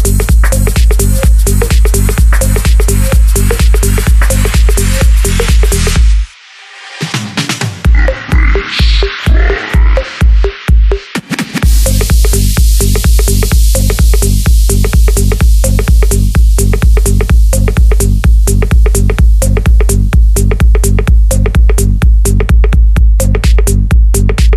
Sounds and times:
Dance music: 0.0s - 24.5s.

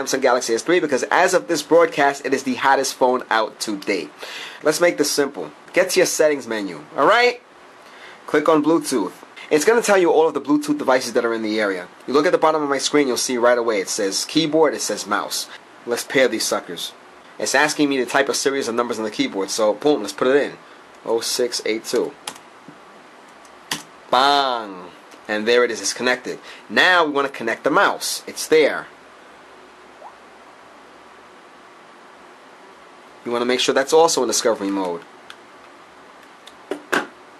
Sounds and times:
Speech: 0.0s - 7.4s, 8.3s - 22.2s, 24.1s - 28.9s, 33.2s - 35.1s.

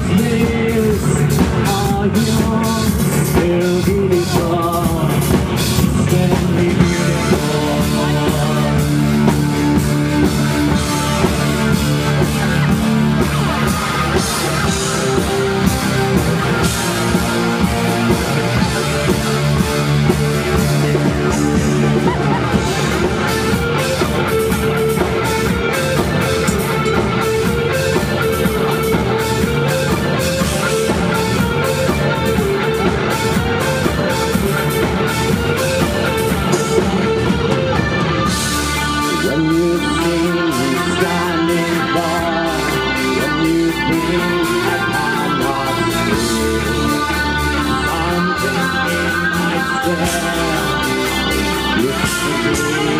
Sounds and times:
Rock and roll: 0.0s - 52.9s.

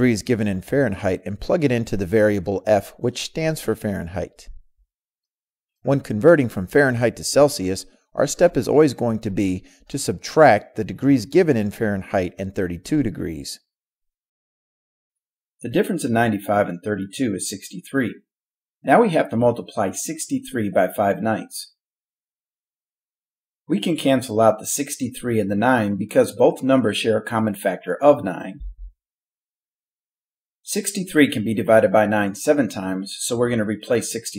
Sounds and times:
Narration, monologue: 0.0s - 13.8s, 15.6s - 23.0s, 23.6s - 29.0s, 30.6s - 34.3s.

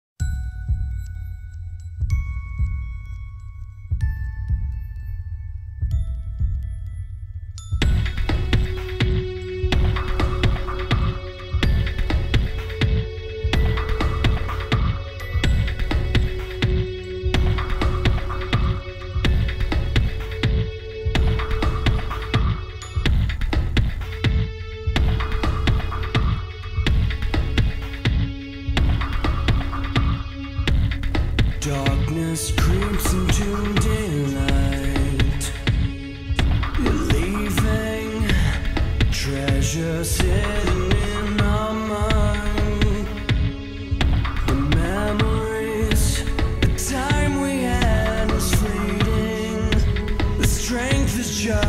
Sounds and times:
Music: 0.2s - 51.6s.

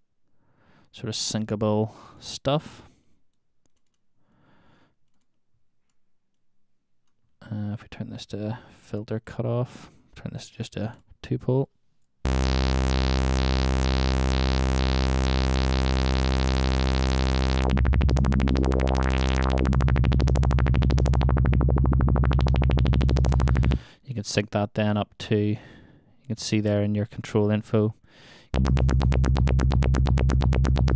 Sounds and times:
Speech: 0.9s - 2.9s, 7.4s - 11.8s, 24.0s - 28.0s
Synthesizer: 12.3s - 23.8s, 28.6s - 30.9s.

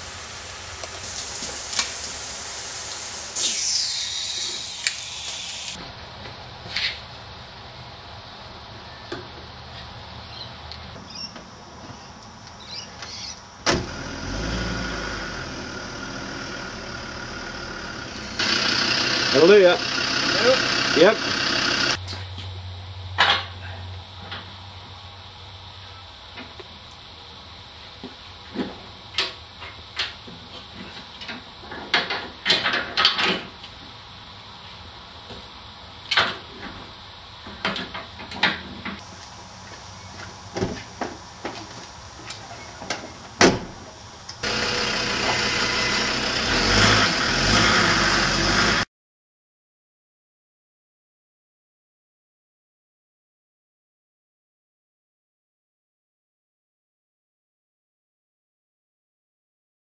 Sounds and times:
Car: 13.6s - 22.0s, 43.3s - 48.9s.

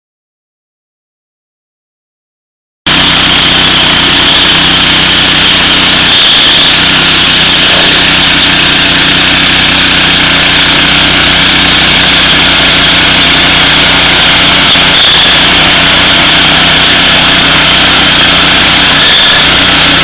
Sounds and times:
Lawn mower: 2.9s - 20.0s.

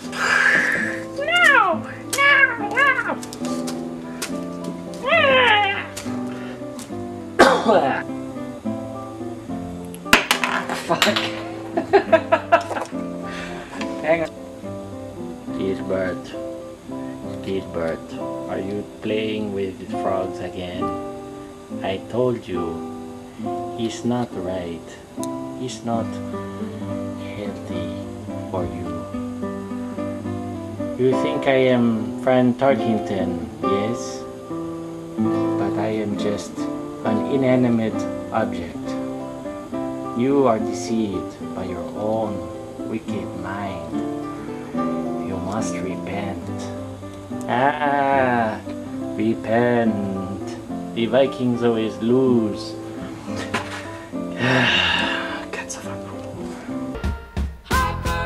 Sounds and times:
Music: 0.0s - 58.2s
Speech: 14.0s - 14.3s, 15.6s - 16.4s, 17.4s - 20.9s, 21.8s - 22.8s, 23.8s - 25.0s, 25.6s - 26.2s, 27.2s - 29.0s, 31.0s - 34.2s, 35.6s - 39.0s, 40.2s - 43.9s, 45.3s - 46.8s, 47.5s - 48.6s, 49.2s - 52.8s.

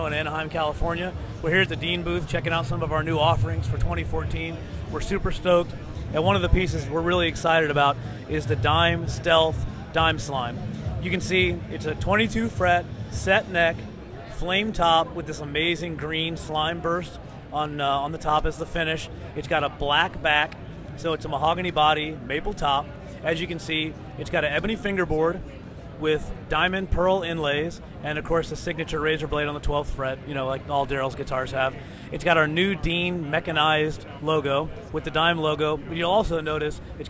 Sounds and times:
Speech: 0.0s - 37.1s.

